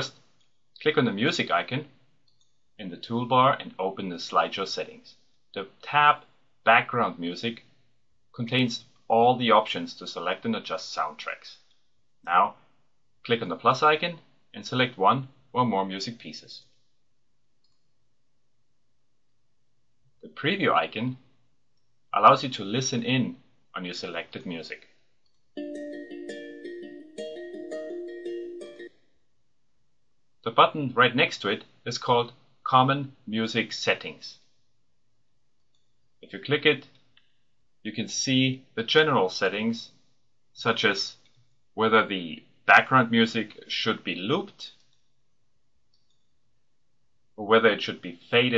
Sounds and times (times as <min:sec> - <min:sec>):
Speech: 0:00.0 - 0:00.2, 0:00.8 - 0:02.0, 0:02.8 - 0:07.7, 0:08.4 - 0:11.7, 0:12.3 - 0:12.6, 0:13.2 - 0:16.7, 0:20.2 - 0:21.3, 0:22.2 - 0:25.0, 0:30.5 - 0:34.5, 0:36.2 - 0:36.9, 0:37.9 - 0:40.0, 0:40.6 - 0:41.2, 0:41.8 - 0:44.8, 0:47.4 - 0:48.5
Music: 0:25.6 - 0:28.9.